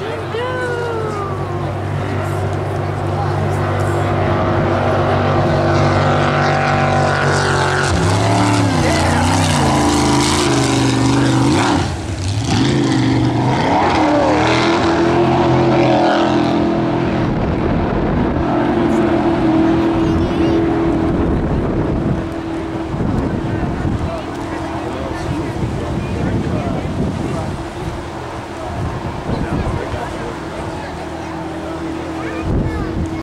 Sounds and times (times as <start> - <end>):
Motorboat, speedboat: 0.0 - 33.2
Speech: 23.2 - 33.2.